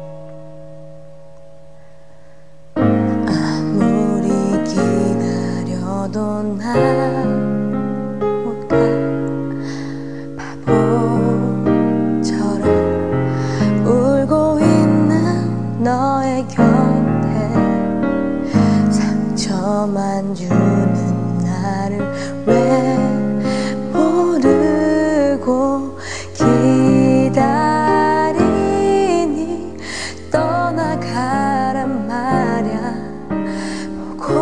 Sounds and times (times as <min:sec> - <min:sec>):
Music: 0:00.0 - 0:34.4
Female singing: 0:03.3 - 0:07.5, 0:10.5 - 0:12.9, 0:13.8 - 0:17.7, 0:19.0 - 0:23.2, 0:24.0 - 0:33.1, 0:34.2 - 0:34.4.